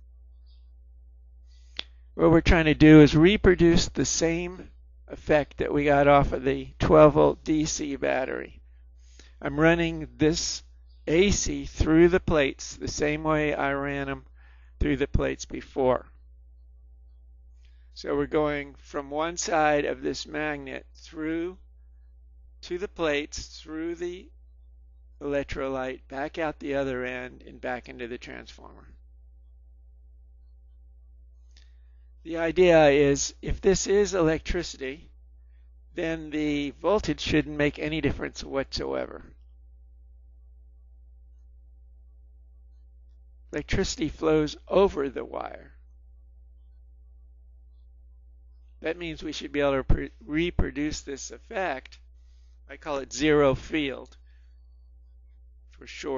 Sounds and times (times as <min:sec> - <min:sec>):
Speech: 0:02.2 - 0:08.6, 0:09.4 - 0:16.2, 0:18.0 - 0:21.6, 0:22.6 - 0:24.4, 0:25.2 - 0:29.0, 0:32.2 - 0:35.1, 0:35.9 - 0:39.4, 0:43.6 - 0:45.8, 0:48.8 - 0:52.0, 0:52.7 - 0:54.2, 0:55.8 - 0:56.1.